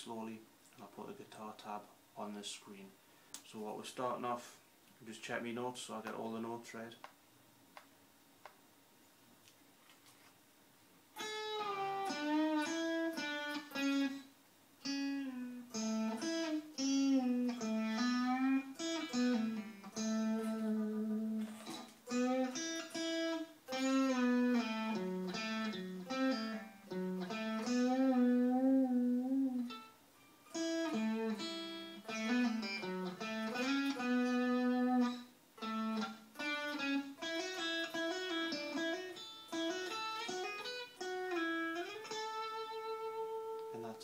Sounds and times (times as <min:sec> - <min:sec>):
Tapping (guitar technique): 0:11.2 - 0:14.2, 0:14.9 - 0:29.9, 0:30.5 - 0:44.0.